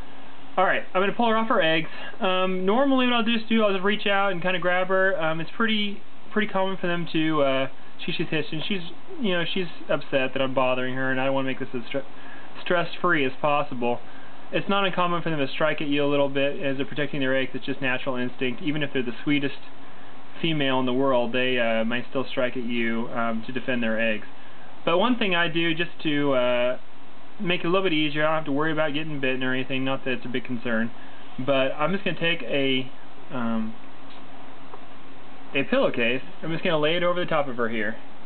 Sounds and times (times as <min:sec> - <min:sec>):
Speech: 0:00.6 - 0:19.8, 0:20.4 - 0:26.8, 0:27.4 - 0:33.8, 0:35.5 - 0:38.1.